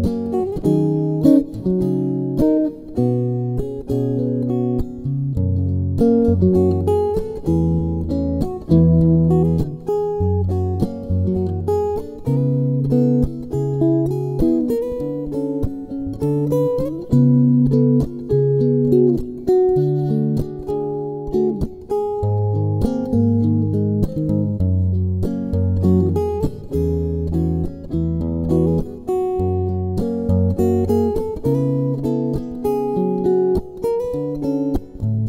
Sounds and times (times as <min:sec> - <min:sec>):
Guitar: 0:00.0 - 0:35.2.